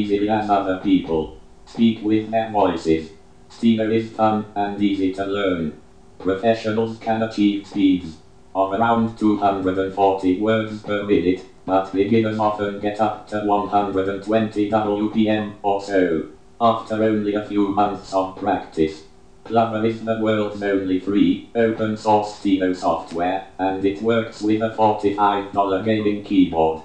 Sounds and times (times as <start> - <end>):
Speech synthesizer: 0.0 - 26.8.